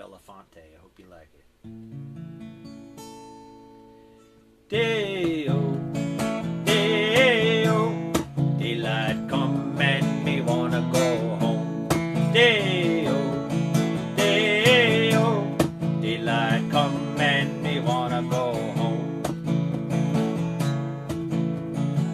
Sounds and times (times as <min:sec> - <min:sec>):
Music: 0:01.6 - 0:22.1.